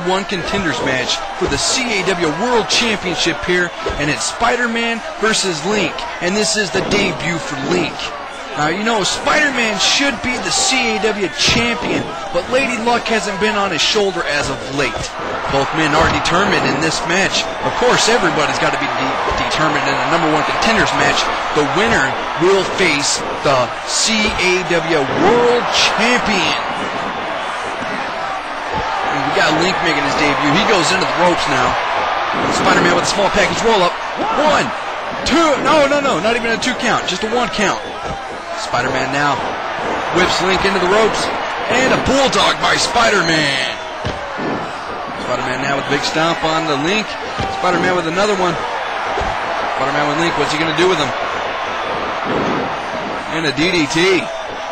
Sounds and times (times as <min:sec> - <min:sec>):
Speech: 0:00.0 - 0:26.8, 0:27.8 - 0:31.8, 0:32.4 - 0:38.0, 0:38.6 - 0:43.9, 0:45.2 - 0:48.6, 0:49.8 - 0:51.2, 0:53.3 - 0:54.3.